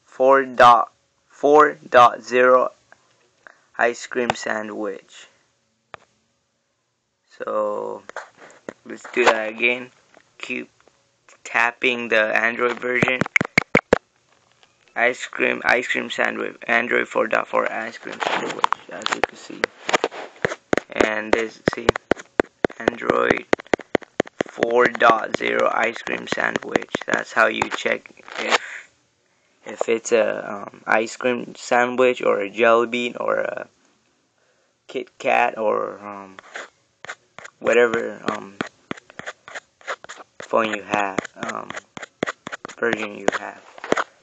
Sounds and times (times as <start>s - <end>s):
Inside, small room: 0.0s - 44.2s
Speech: 0.1s - 2.8s, 3.8s - 5.4s, 7.3s - 8.1s, 8.8s - 10.7s, 11.3s - 13.2s, 15.0s - 19.7s, 20.9s - 22.0s, 22.8s - 23.4s, 24.6s - 28.8s, 29.7s - 33.7s, 34.9s - 36.4s, 37.6s - 38.6s, 40.5s - 41.8s, 42.8s - 43.6s.